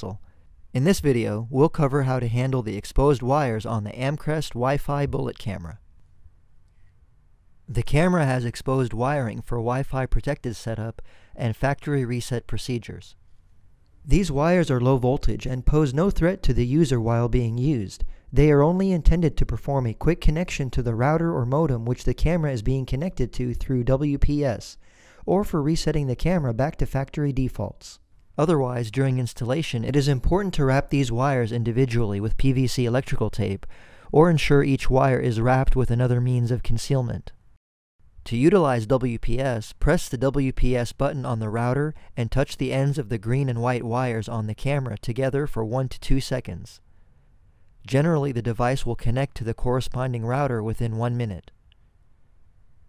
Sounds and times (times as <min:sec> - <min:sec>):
Speech: 0:00.0 - 0:00.2, 0:00.8 - 0:05.8, 0:07.7 - 0:13.2, 0:14.1 - 0:37.4, 0:38.2 - 0:46.8, 0:47.9 - 0:51.5.